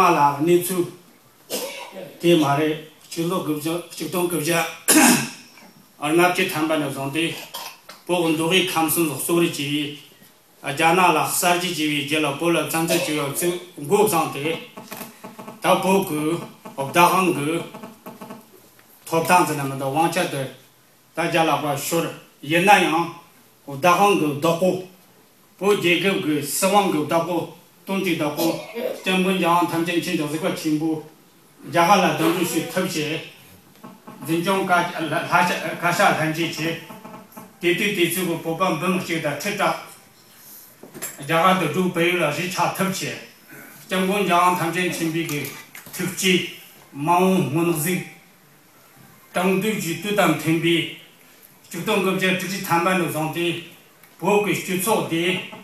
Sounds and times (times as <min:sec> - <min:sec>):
Speech: 0:00.0 - 0:01.0, 0:01.9 - 0:05.3, 0:06.0 - 0:07.5, 0:08.1 - 0:10.0, 0:10.6 - 0:14.7, 0:15.6 - 0:17.7, 0:19.1 - 0:20.6, 0:21.2 - 0:24.9, 0:25.6 - 0:33.4, 0:34.2 - 0:36.9, 0:37.6 - 0:40.0, 0:41.2 - 0:43.3, 0:43.9 - 0:48.2, 0:49.4 - 0:51.0, 0:51.7 - 0:55.6
Inside, large room or hall: 0:00.0 - 0:25.0.